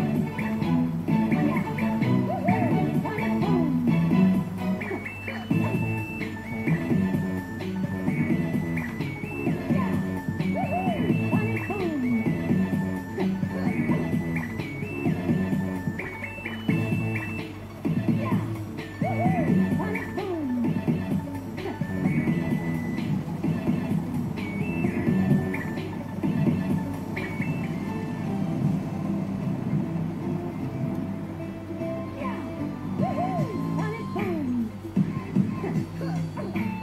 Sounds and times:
Soundtrack music: 0.0s - 36.8s.

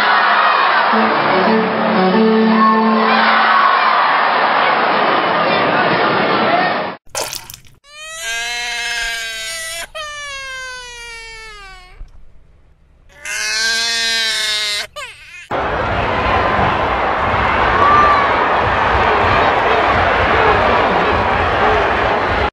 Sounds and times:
Screaming: 7.9s - 12.0s, 13.1s - 15.6s.

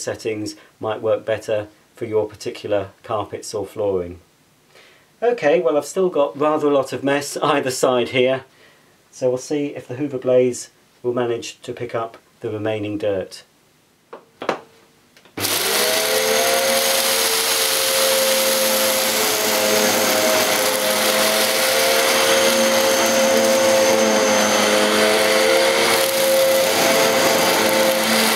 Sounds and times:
Inside, small room: 0.0s - 28.3s
Vacuum cleaner: 15.4s - 28.3s.

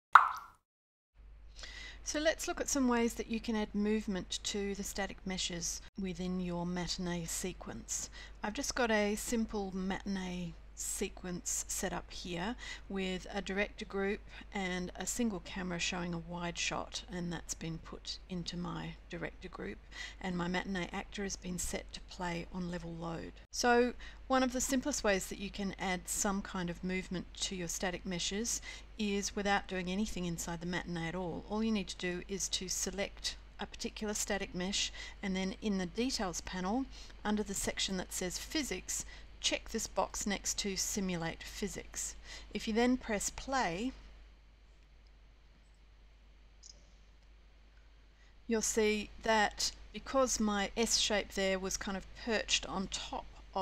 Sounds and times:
Plop: 0.2s - 0.6s
Speech: 2.0s - 44.0s, 48.5s - 53.6s.

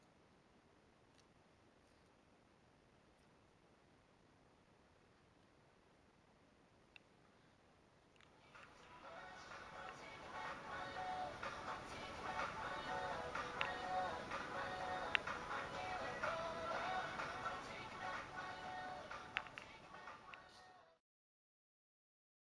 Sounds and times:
Music: 8.4s - 21.0s.

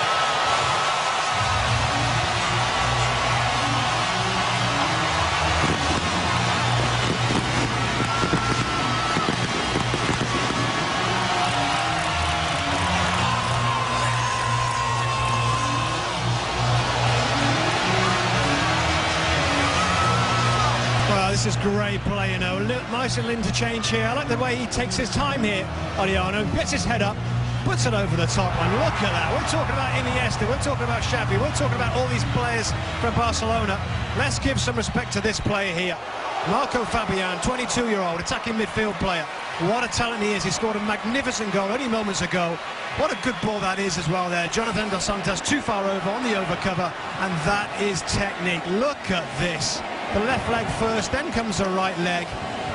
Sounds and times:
Music: 0.0s - 52.7s.

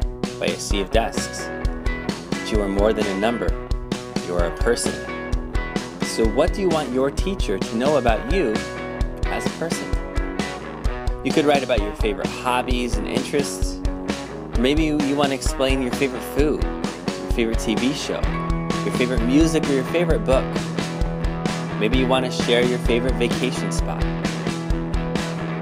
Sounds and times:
Speech: 0.0s - 1.5s, 2.4s - 3.6s, 4.2s - 5.1s, 6.1s - 10.0s, 11.2s - 13.8s, 14.6s - 16.7s, 17.3s - 20.5s, 21.8s - 24.2s
Music: 0.0s - 25.6s.

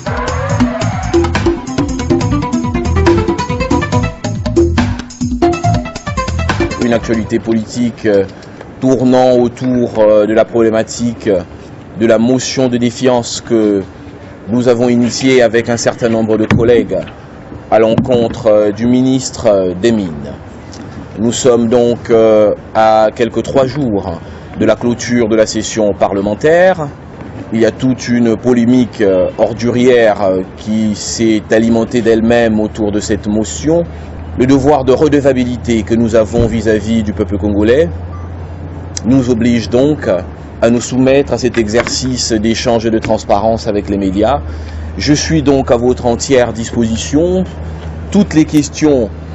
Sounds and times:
Speech: 6.8s - 13.9s, 14.5s - 17.1s, 17.7s - 20.4s, 21.2s - 38.0s, 39.0s - 44.4s, 45.0s - 49.1s.

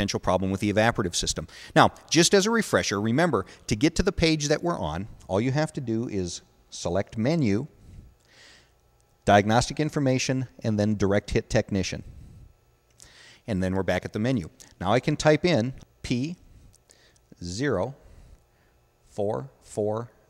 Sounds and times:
Speech: 0.0s - 7.7s, 9.3s - 12.0s, 13.5s - 16.4s, 17.4s - 18.0s, 19.1s - 20.2s.

